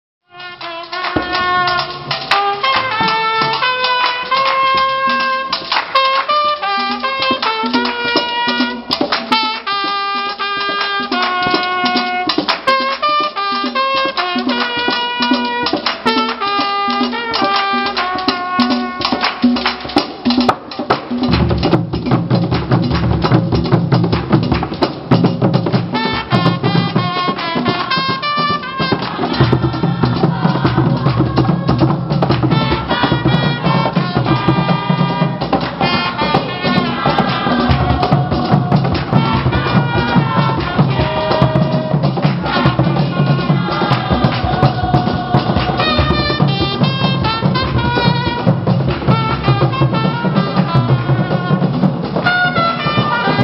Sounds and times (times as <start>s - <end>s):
Trumpet: 0.2s - 53.4s.